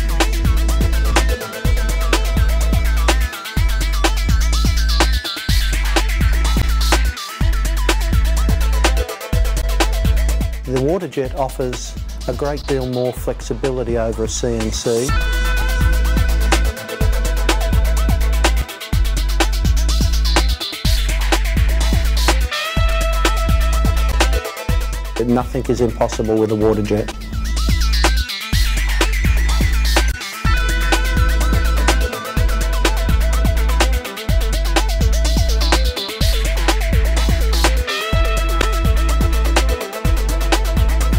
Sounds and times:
Music: 0.0s - 41.1s
Speech: 10.7s - 15.1s, 25.2s - 27.2s.

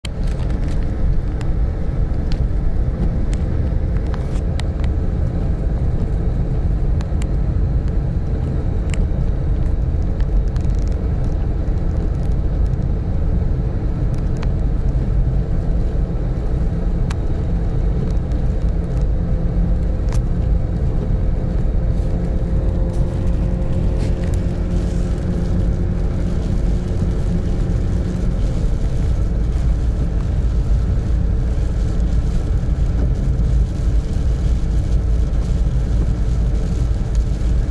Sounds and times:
Car: 0.0s - 37.7s
Field recording: 0.0s - 37.7s
Outside, urban or manmade: 0.0s - 37.7s.

